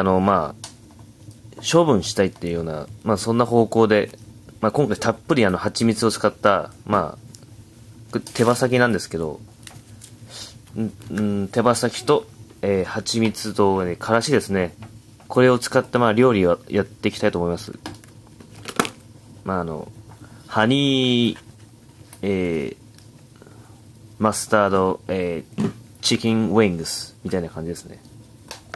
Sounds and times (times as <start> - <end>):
Speech: 0.0 - 0.6, 1.6 - 7.2, 8.1 - 9.4, 10.8 - 17.8, 19.4 - 21.4, 22.2 - 22.8, 24.2 - 28.1.